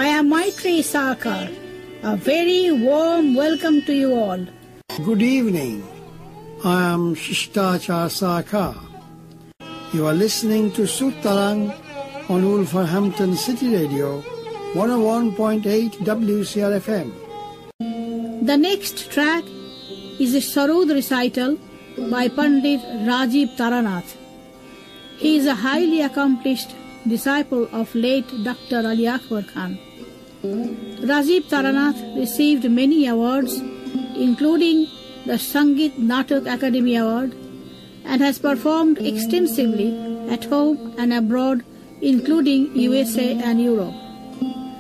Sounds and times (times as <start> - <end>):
Speech: 0.0 - 6.0, 6.6 - 9.0, 10.0 - 14.2, 14.8 - 17.2, 18.4 - 19.5, 20.2 - 24.2, 25.2 - 29.8, 31.0 - 33.6, 34.2 - 37.4, 38.1 - 44.0
Music: 0.0 - 44.8.